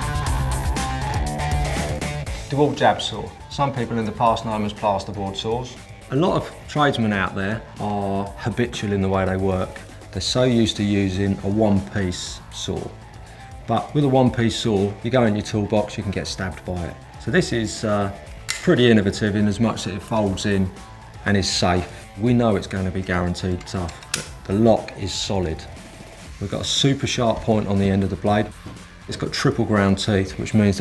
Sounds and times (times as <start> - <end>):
Music: 0.0 - 30.8
Speech: 2.5 - 13.0, 13.7 - 25.8, 26.4 - 30.8
Tools: 18.5 - 18.7, 23.6 - 24.4.